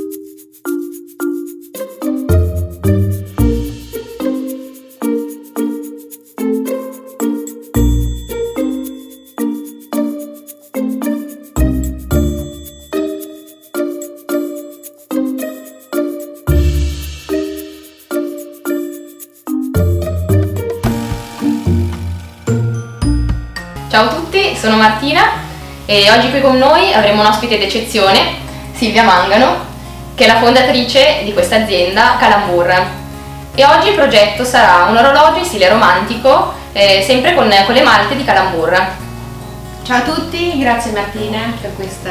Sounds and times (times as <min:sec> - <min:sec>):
Music: 0:00.0 - 0:42.1
Speech: 0:23.9 - 0:33.0, 0:33.6 - 0:39.0, 0:39.9 - 0:42.1.